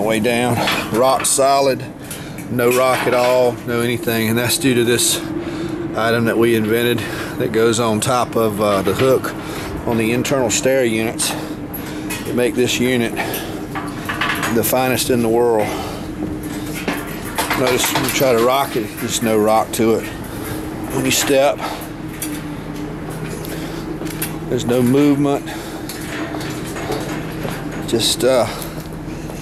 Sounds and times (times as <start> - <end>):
Speech: 0.0 - 1.9, 2.5 - 5.3, 6.0 - 11.5, 12.3 - 13.4, 14.5 - 15.9, 17.5 - 20.1, 20.9 - 21.7, 24.5 - 25.6, 27.9 - 28.7.